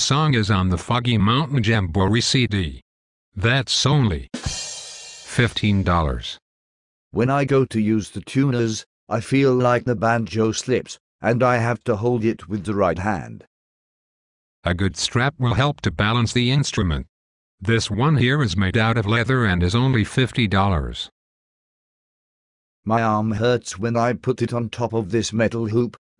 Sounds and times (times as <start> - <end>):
Speech synthesizer: 0.0 - 2.8, 3.4 - 4.3, 5.3 - 6.4, 7.2 - 13.5, 14.7 - 21.1, 22.9 - 26.0.